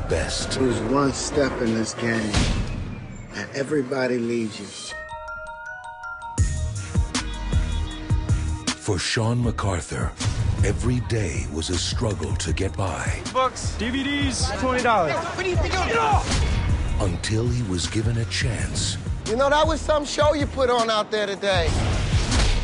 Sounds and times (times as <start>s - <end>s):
Glockenspiel: 4.9s - 7.1s
Marimba, xylophone: 4.9s - 7.2s.